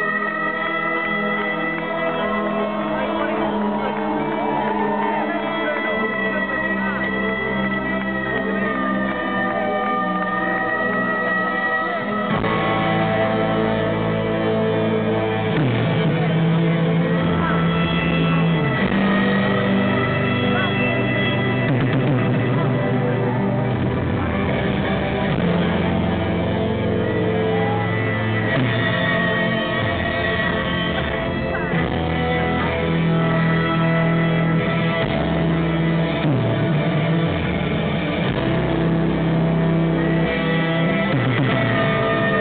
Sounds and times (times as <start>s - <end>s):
Wind instrument, woodwind instrument: 0.0s - 42.4s.